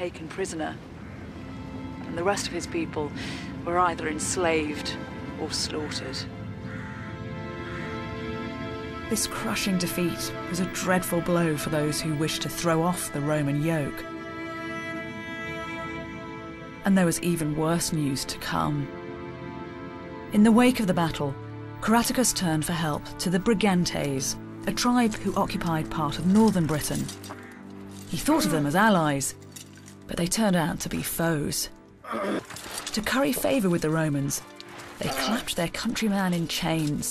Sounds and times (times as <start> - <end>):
Female speech, woman speaking: 0.0 - 0.8, 2.0 - 6.3, 9.1 - 14.0, 16.8 - 18.9, 20.3 - 27.2, 28.1 - 29.4, 30.1 - 31.7, 32.9 - 34.4, 35.0 - 37.1
Narration, monologue: 0.0 - 6.4, 8.9 - 14.9, 16.7 - 37.1
Music: 0.0 - 37.1.